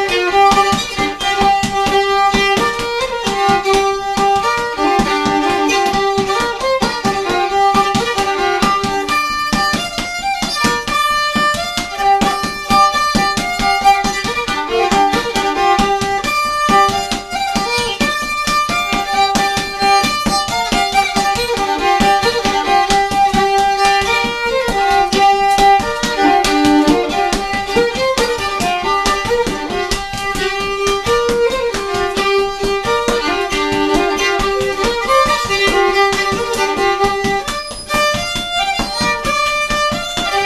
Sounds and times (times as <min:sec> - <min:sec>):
Violin, fiddle: 0:00.0 - 0:40.4.